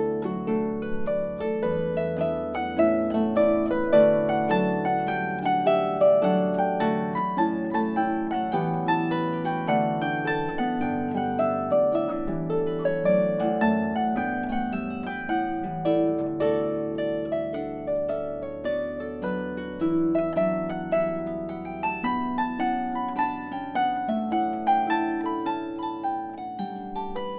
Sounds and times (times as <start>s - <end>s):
Harp: 0.0s - 27.3s.